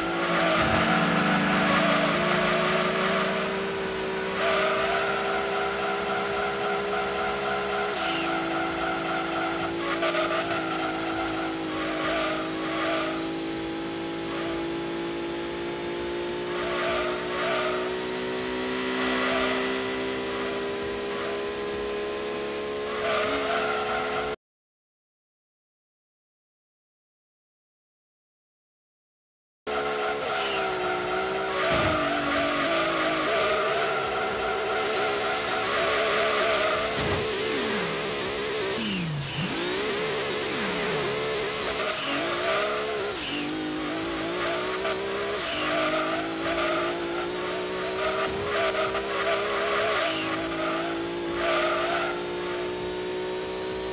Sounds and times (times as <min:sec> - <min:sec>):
Car: 0:00.0 - 0:24.4, 0:29.7 - 0:53.9.